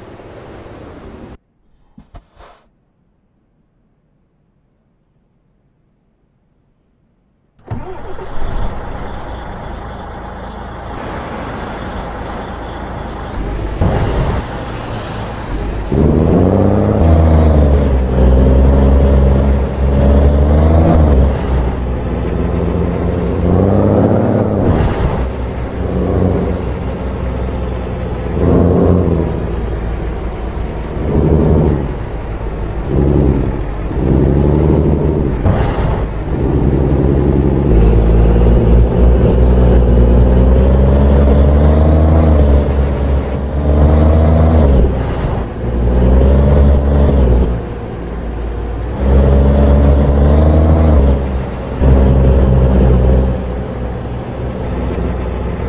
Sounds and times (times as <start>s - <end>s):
Truck: 0.0s - 2.7s, 6.7s - 55.6s.